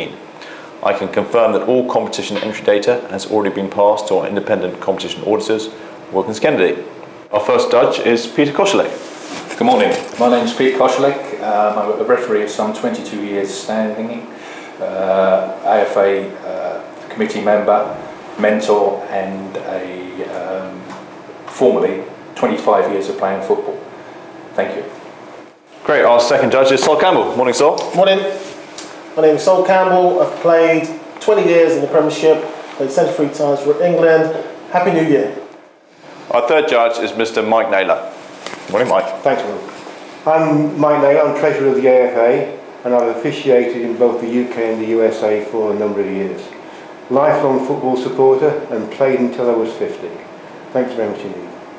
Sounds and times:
Speech: 0.0 - 23.9, 24.6 - 25.0, 25.8 - 28.6, 29.2 - 35.5, 36.3 - 51.6.

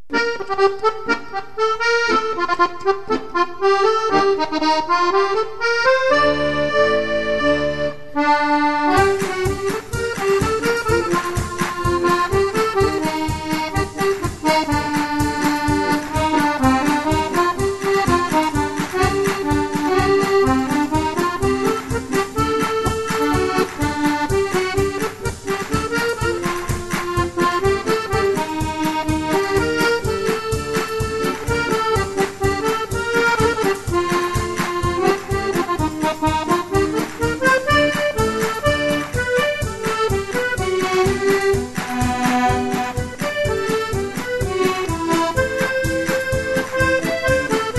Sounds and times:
Accordion: 0.0 - 47.7.

